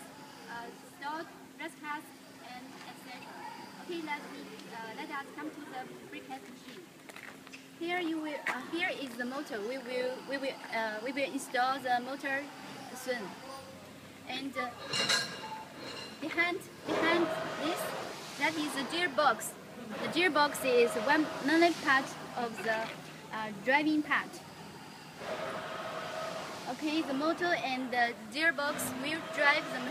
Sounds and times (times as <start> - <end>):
Speech: 16.2 - 24.4, 26.7 - 29.9.